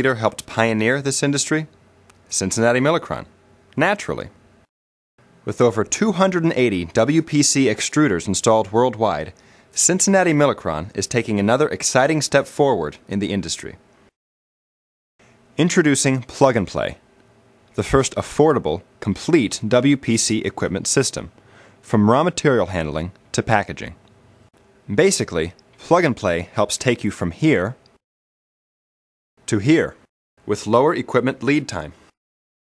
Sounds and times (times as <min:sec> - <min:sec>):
Speech: 0:00.0 - 0:01.7, 0:02.3 - 0:04.4, 0:05.5 - 0:13.8, 0:15.6 - 0:17.0, 0:17.8 - 0:24.0, 0:24.9 - 0:27.8, 0:29.5 - 0:32.0.